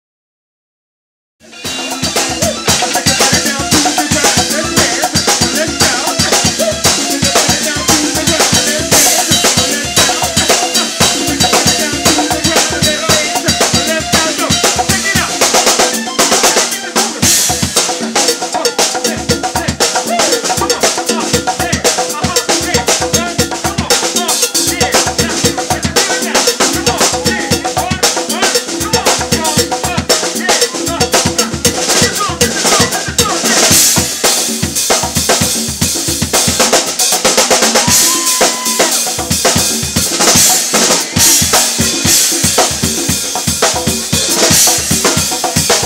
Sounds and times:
Drum kit: 0:01.4 - 0:45.8
Bass drum: 0:01.5 - 0:30.2, 0:30.9 - 0:45.8.

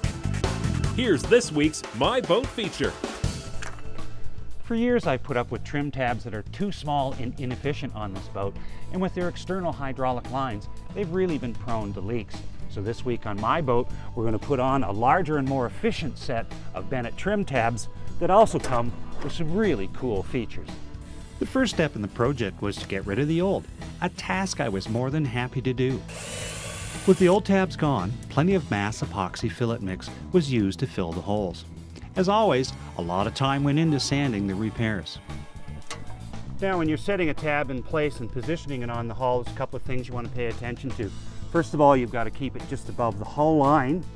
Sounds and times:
Music: 0:00.0 - 0:44.1
Speech: 0:01.0 - 0:03.0, 0:04.7 - 0:20.7, 0:21.4 - 0:26.0, 0:27.1 - 0:31.6, 0:32.2 - 0:35.2, 0:36.6 - 0:44.1.

